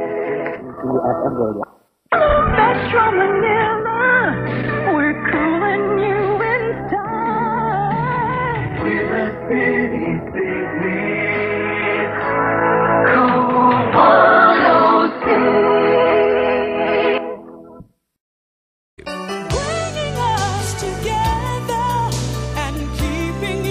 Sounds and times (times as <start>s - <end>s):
Music: 0.0s - 0.6s, 2.2s - 17.8s, 19.0s - 23.7s.